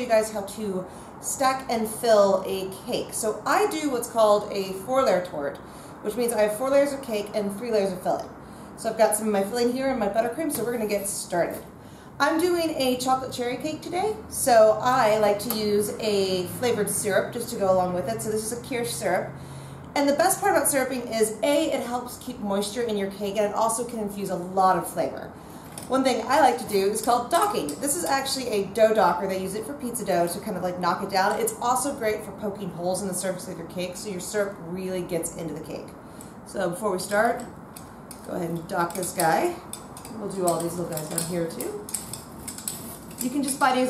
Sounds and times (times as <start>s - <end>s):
Speech: 0.0s - 11.6s, 12.2s - 19.3s, 20.0s - 25.3s, 25.9s - 37.5s, 38.2s - 39.6s, 40.2s - 41.9s, 43.2s - 43.9s.